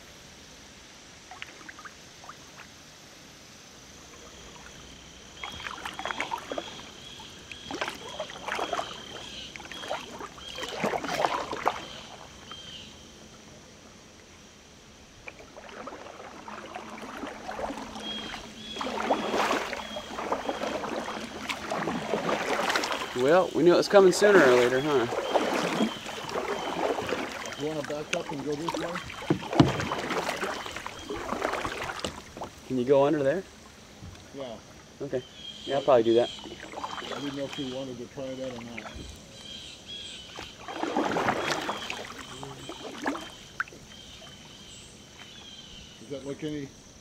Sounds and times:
Speech: 0:23.2 - 0:25.1, 0:27.6 - 0:29.0, 0:34.4 - 0:36.4, 0:37.2 - 0:39.0, 0:46.0 - 0:46.7.

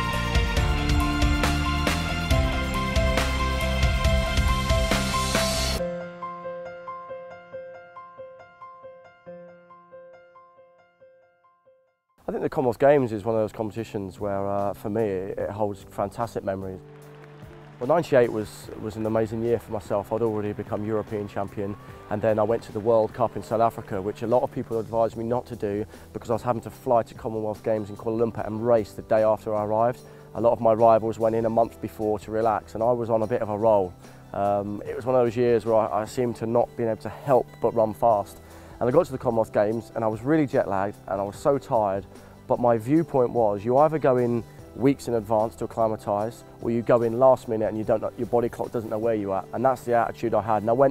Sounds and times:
Music: 0:00.0 - 0:50.9
Speech: 0:12.3 - 0:16.8, 0:17.8 - 0:50.9.

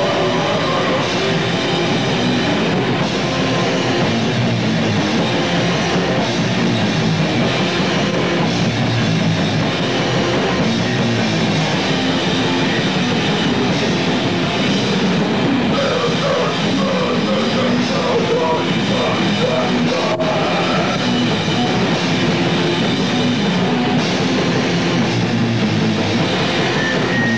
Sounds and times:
Cacophony: 0:00.0 - 0:27.3
Music: 0:00.0 - 0:27.3.

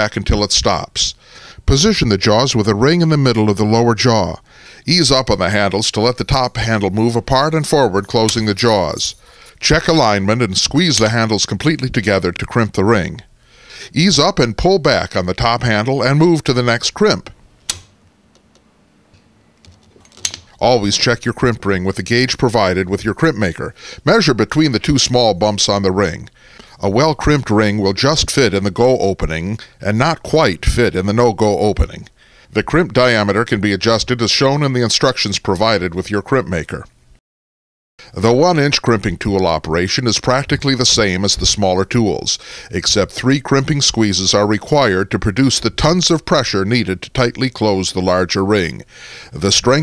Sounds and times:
Speech: 0:00.0 - 0:13.3, 0:13.9 - 0:17.4, 0:20.6 - 0:36.9, 0:38.1 - 0:49.8
Tools: 0:19.6 - 0:20.6.

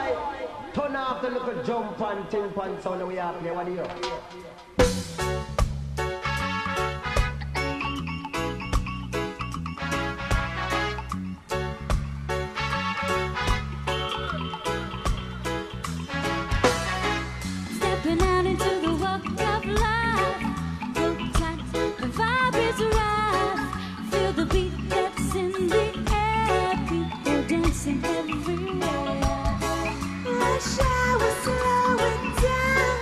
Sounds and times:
Speech: 0:00.0 - 0:04.4
Music: 0:03.8 - 0:33.0.

